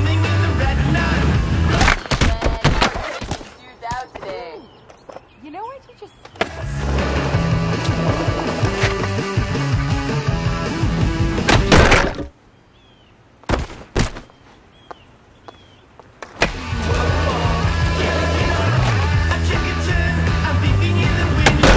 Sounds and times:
Music: 0.0s - 1.9s, 6.6s - 11.8s, 16.5s - 21.7s.

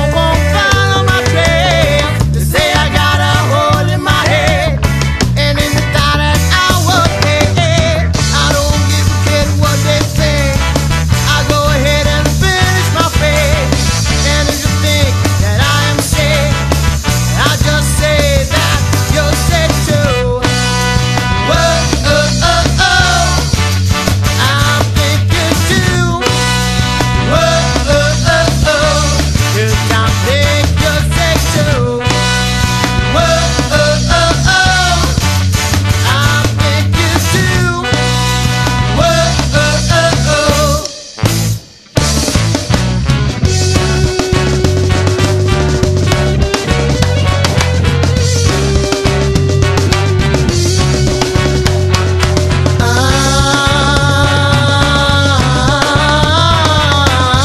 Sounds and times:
Ska: 0.0s - 57.4s.

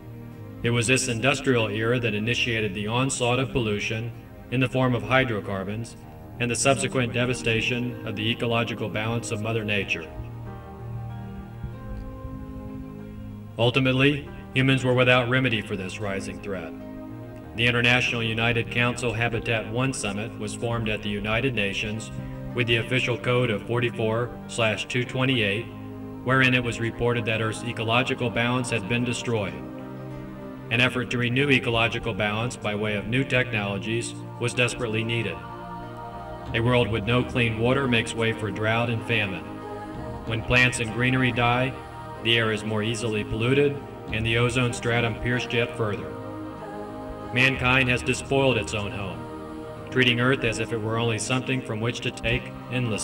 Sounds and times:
Music: 0.0s - 53.0s
Speech: 0.6s - 10.1s, 13.6s - 16.7s, 17.6s - 25.7s, 26.3s - 29.6s, 30.7s - 35.4s, 36.6s - 39.5s, 40.3s - 46.1s, 47.4s - 49.2s, 49.9s - 53.0s.

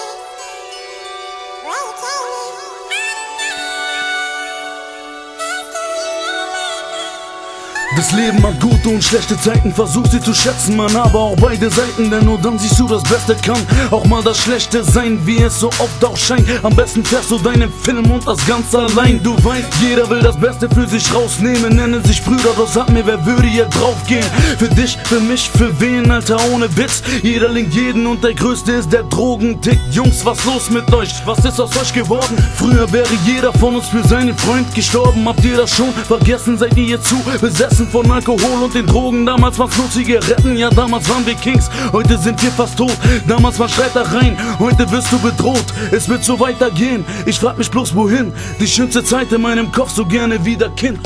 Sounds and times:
Music: 0.0s - 51.0s.

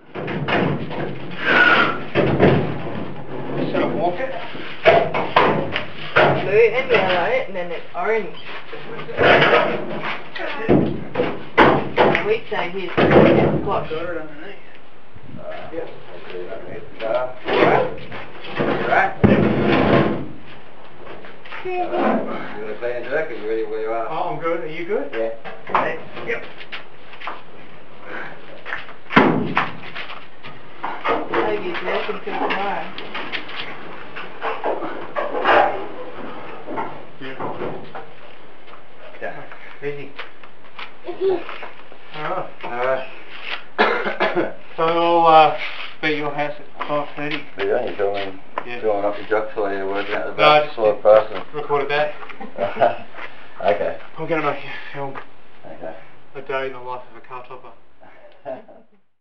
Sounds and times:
Speech: 3.6s - 4.6s, 6.2s - 9.7s, 12.0s - 14.7s, 31.3s - 33.0s, 44.8s - 52.8s.

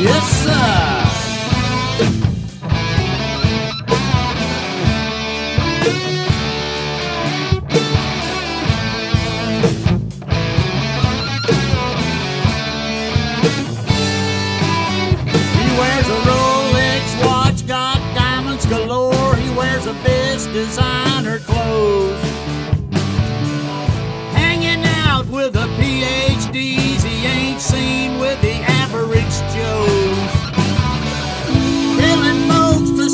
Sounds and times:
Music: 0.0s - 33.1s.

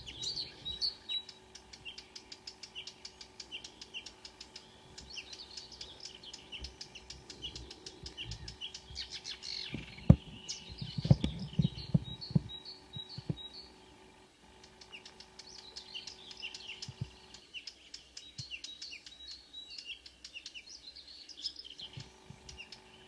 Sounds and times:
Chirp, tweet: 0.0s - 23.0s
Outside, rural or natural: 0.0s - 23.0s.

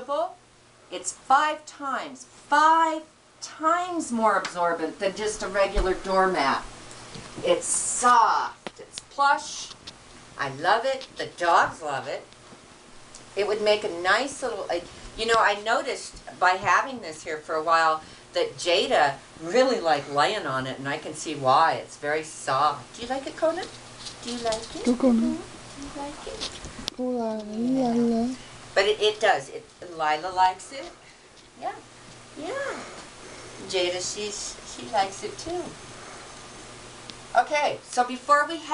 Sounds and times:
Speech: 0.0s - 6.7s, 7.4s - 9.8s, 10.4s - 12.3s, 13.4s - 31.0s, 31.6s - 31.8s, 33.6s - 35.8s, 37.4s - 38.7s.

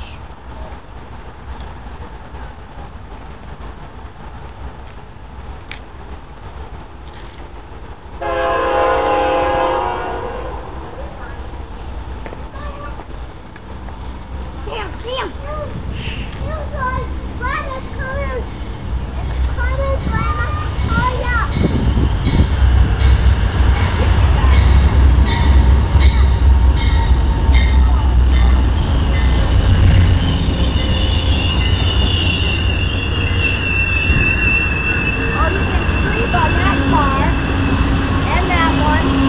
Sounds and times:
Train: 0.0s - 39.2s.

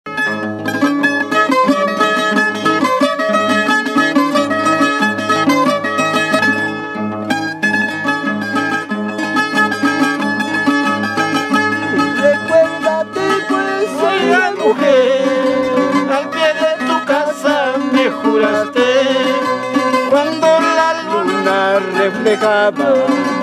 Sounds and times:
Mandolin: 0.1s - 23.4s.

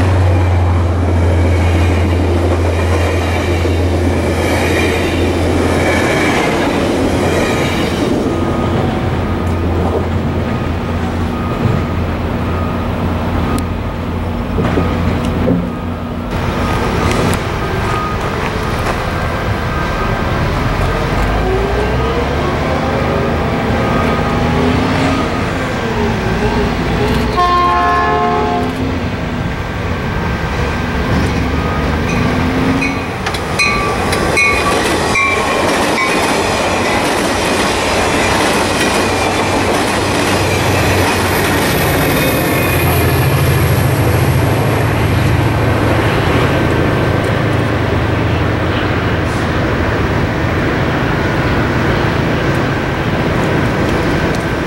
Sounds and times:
Railroad car, train wagon: 0.0s - 54.6s
Train: 0.0s - 54.6s.

